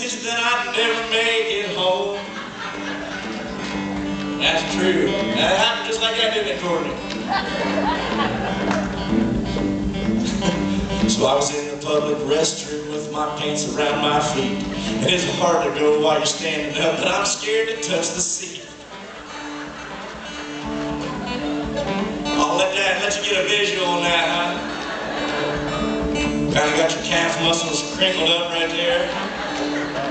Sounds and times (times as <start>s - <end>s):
Music: 0.0s - 30.1s
Speech: 4.4s - 7.0s, 11.2s - 18.8s, 22.4s - 24.6s, 26.5s - 29.1s.